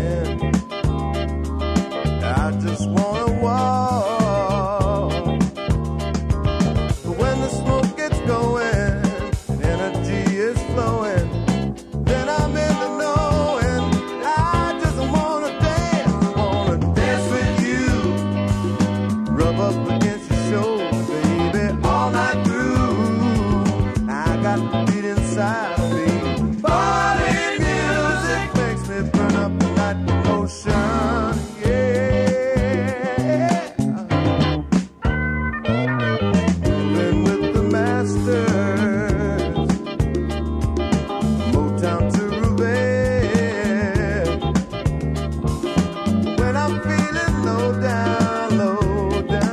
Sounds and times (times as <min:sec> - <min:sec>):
Pop music: 0:00.0 - 0:49.5.